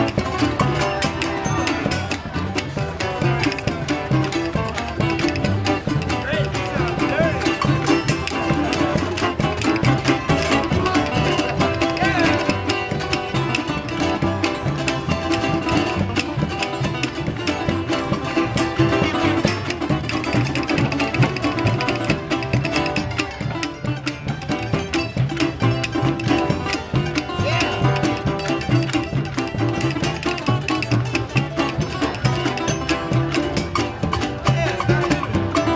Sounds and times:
Music: 0.0s - 35.7s
Speech: 5.6s - 13.6s, 27.1s - 28.2s, 29.8s - 35.7s.

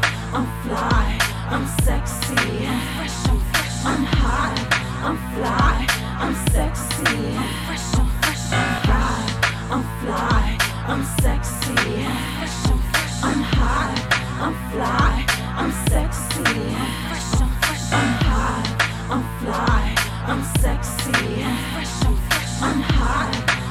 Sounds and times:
Music: 0.0s - 23.7s.

